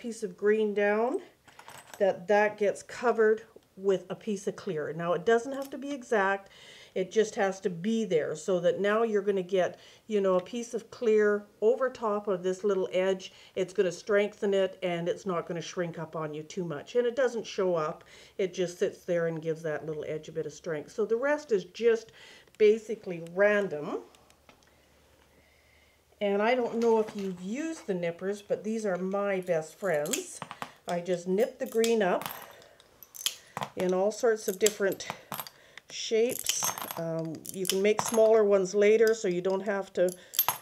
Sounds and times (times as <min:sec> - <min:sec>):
Speech: 0:00.0 - 0:01.3, 0:02.0 - 0:24.1, 0:26.2 - 0:32.2, 0:33.8 - 0:35.1, 0:35.9 - 0:40.2.